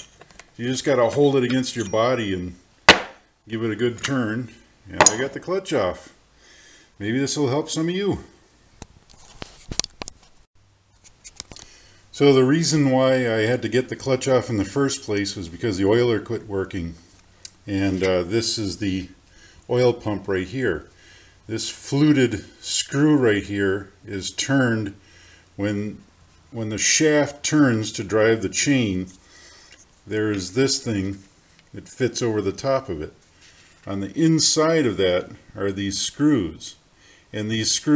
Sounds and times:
Speech: 0.6 - 2.6, 3.5 - 6.2, 7.0 - 8.4, 12.1 - 20.9, 21.5 - 25.0, 25.6 - 29.2, 30.1 - 33.2, 33.9 - 36.8, 37.4 - 37.9.

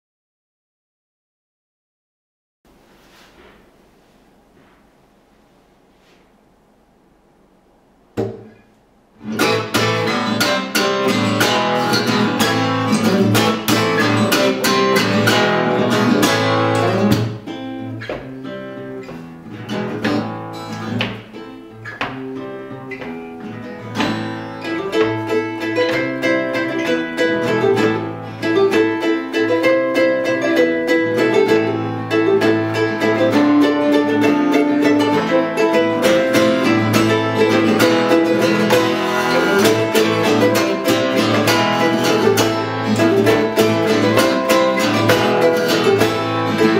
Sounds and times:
Guitar: 8.1 - 46.7.

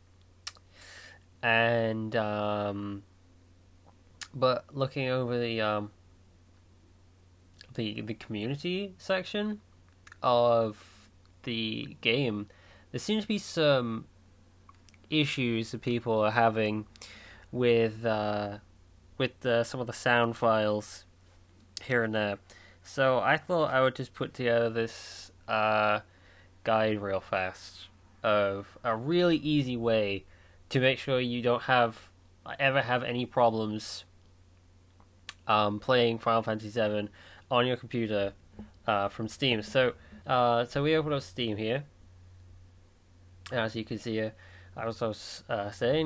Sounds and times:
Speech: 1.4 - 3.0, 4.2 - 6.0, 7.6 - 9.6, 10.2 - 14.1, 15.1 - 16.9, 17.5 - 18.6, 19.2 - 21.1, 21.8 - 34.1, 35.4 - 41.9, 43.5 - 46.0.

